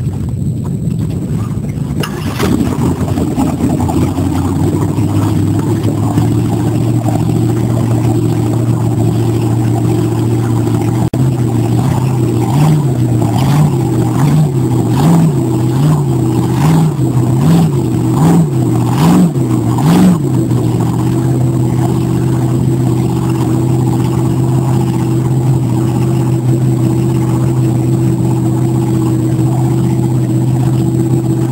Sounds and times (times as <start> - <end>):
Motorboat, speedboat: 0.0 - 31.5.